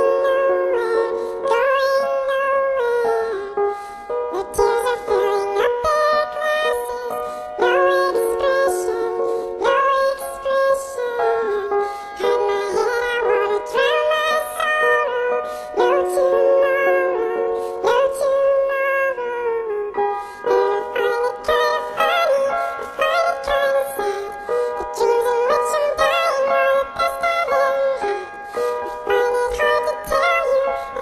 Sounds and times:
Music: 0.0s - 31.0s.

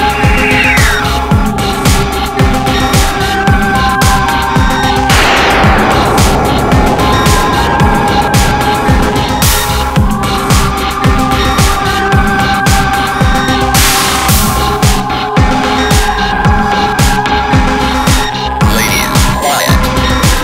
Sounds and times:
Music: 0.0s - 20.4s.

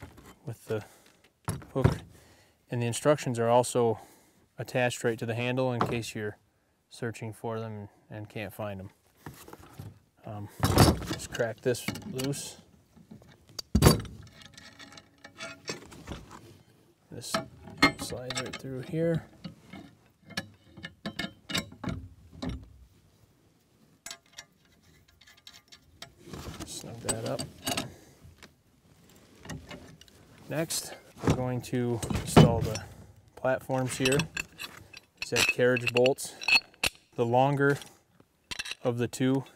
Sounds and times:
Speech: 0.4s - 0.9s, 1.7s - 2.0s, 2.7s - 4.0s, 4.6s - 9.0s, 10.2s - 12.6s, 17.1s - 19.3s, 26.6s - 27.5s, 30.5s - 34.3s, 35.2s - 36.4s, 37.2s - 37.8s, 38.8s - 39.5s.

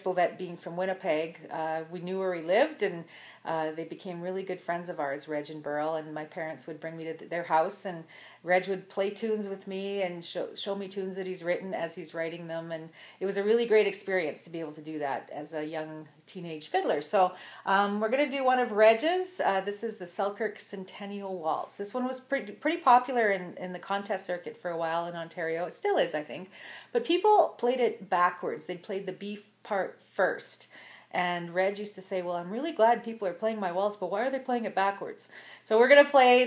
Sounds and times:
Speech: 0.0s - 36.4s.

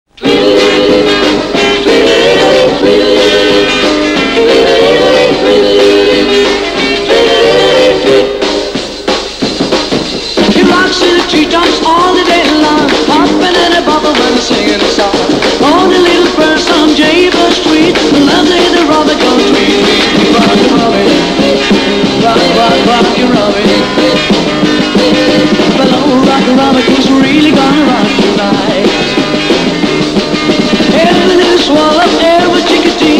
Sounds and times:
Drum: 0.1s - 33.1s
Singing: 0.2s - 6.3s, 10.5s - 24.3s, 24.9s - 29.0s, 30.9s - 33.1s.

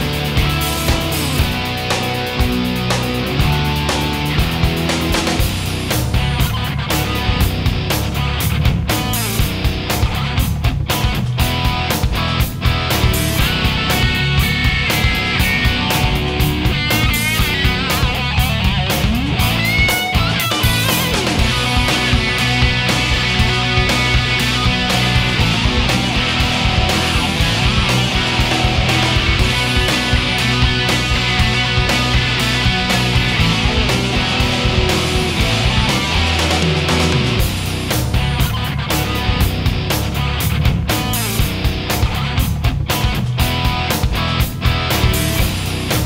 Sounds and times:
Music: 0.0s - 46.0s.

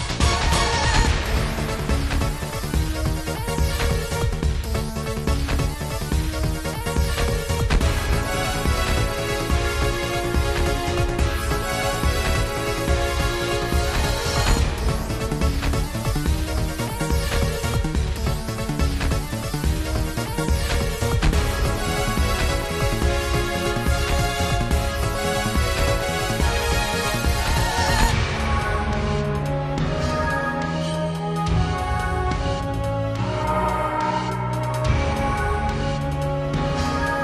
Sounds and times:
Music: 0.0s - 37.2s.

